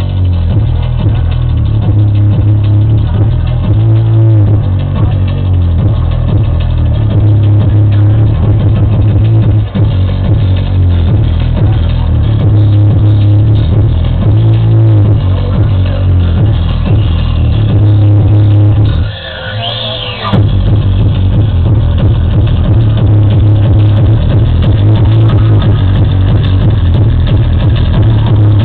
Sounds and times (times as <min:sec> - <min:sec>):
Hubbub, speech noise, speech babble: 0:00.0 - 0:28.6
Music: 0:00.0 - 0:28.6.